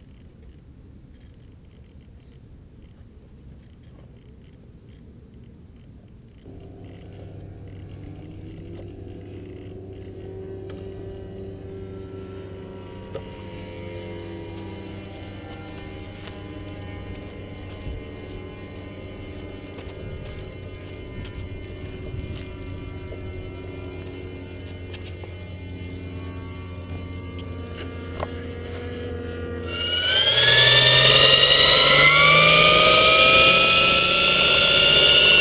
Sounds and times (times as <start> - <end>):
Vibration: 6.4 - 35.4.